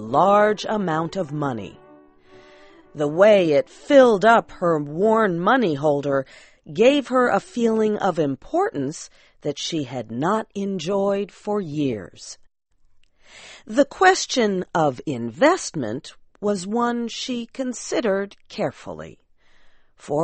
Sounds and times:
Narration, monologue: 0.0 - 20.2.

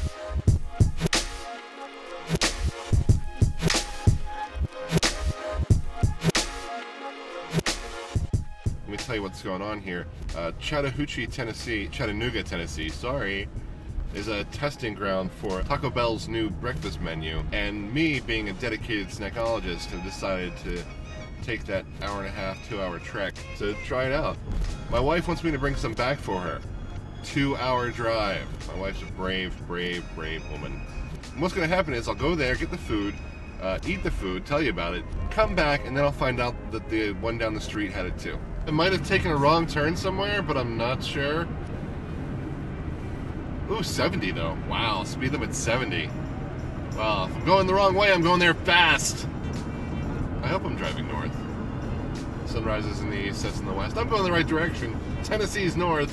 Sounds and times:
Music: 0.0 - 42.2, 43.0 - 56.1
Speech: 8.9 - 13.5, 14.1 - 26.6, 27.2 - 30.8, 31.4 - 41.5, 43.7 - 46.1, 47.0 - 49.3, 50.4 - 51.4, 52.5 - 56.1.

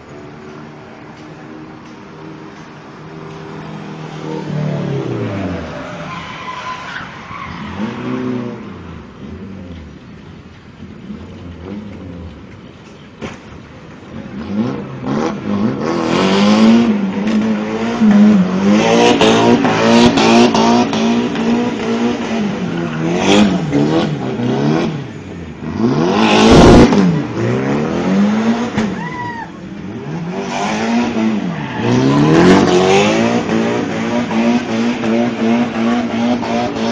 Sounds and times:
Car passing by: 1.1 - 9.8.

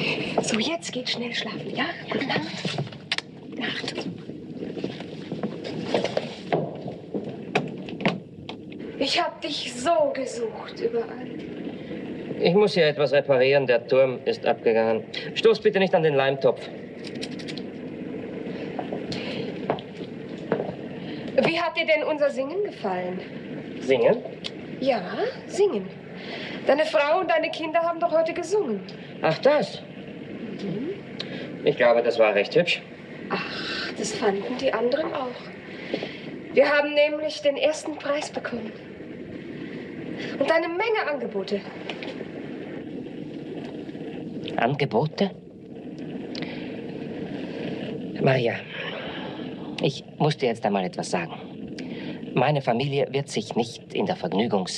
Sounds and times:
White noise: 0.0 - 54.7
Speech: 23.8 - 25.9, 52.4 - 54.7.

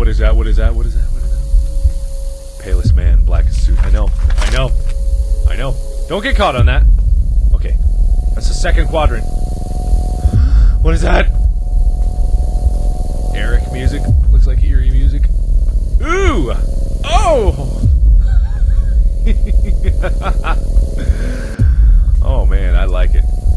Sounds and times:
Speech: 0.0 - 1.4, 2.6 - 4.8, 5.5 - 6.9, 7.6 - 7.8, 8.4 - 9.3, 10.8 - 11.3, 13.4 - 15.3, 16.0 - 17.7, 22.2 - 23.2
Music: 0.0 - 23.5.

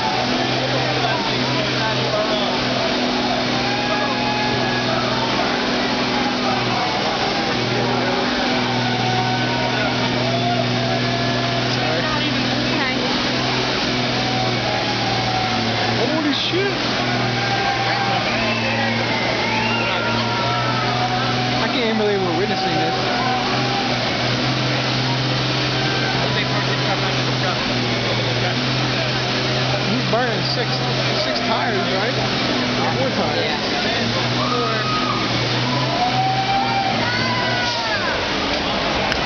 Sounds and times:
Speech: 0.0 - 17.3, 17.9 - 36.1
Truck: 0.0 - 39.2.

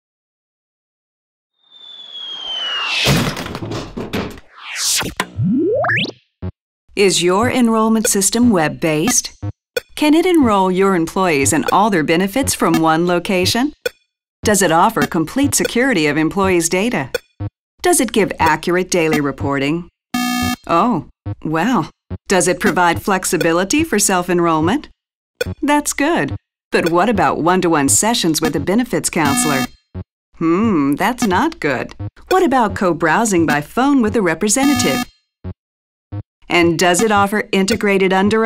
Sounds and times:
Sound effect: 1.6 - 6.2, 29.3 - 29.7
Speech: 7.0 - 9.3, 10.0 - 13.8, 14.4 - 17.2, 17.8 - 19.9, 20.7 - 24.9, 25.6 - 29.7, 30.4 - 35.0, 36.5 - 38.4.

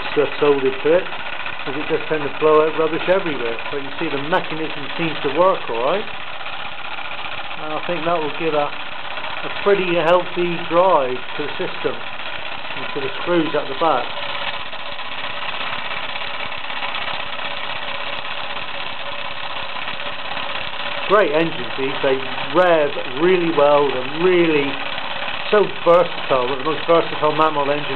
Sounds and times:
Speech: 0.0 - 1.1, 1.7 - 6.1, 7.6 - 8.8, 9.5 - 12.0, 12.8 - 14.1, 21.1 - 24.8, 25.5 - 27.9
Engine: 0.0 - 27.9.

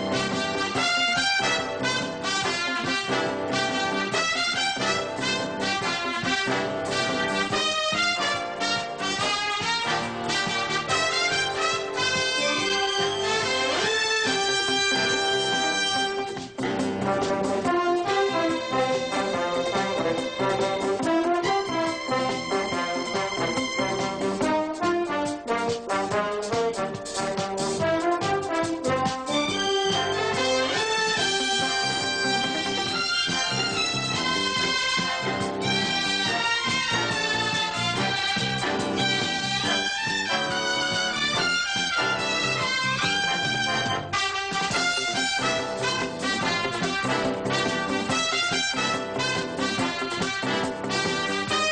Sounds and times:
Music: 0.0 - 51.7.

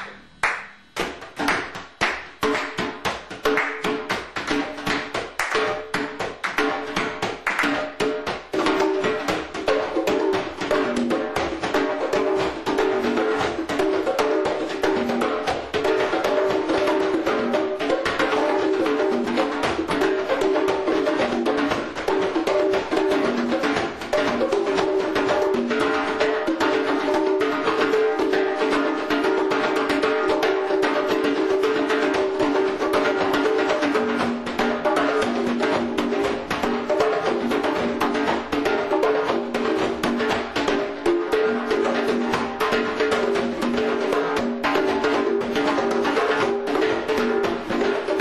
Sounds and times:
Percussion: 0.0 - 48.2.

